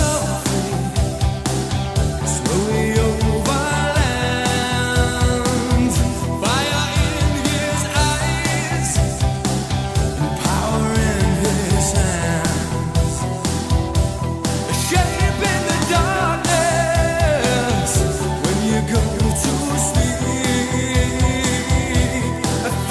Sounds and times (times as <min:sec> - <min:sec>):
Music: 0:00.0 - 0:22.9.